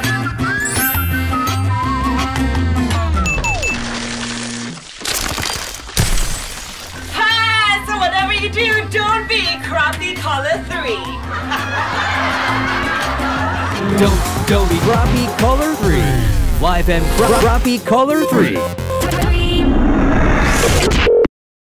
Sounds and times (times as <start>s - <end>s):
Music: 0.0s - 4.0s, 7.0s - 21.0s
Speech: 14.0s - 18.7s.